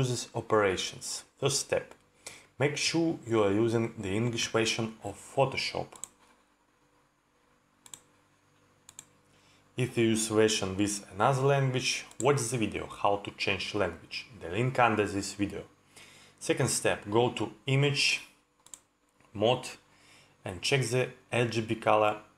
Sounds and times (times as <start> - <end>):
Speech: 0.0 - 2.0, 2.6 - 6.0, 9.8 - 15.7, 16.4 - 18.4, 19.3 - 19.8, 20.4 - 22.3.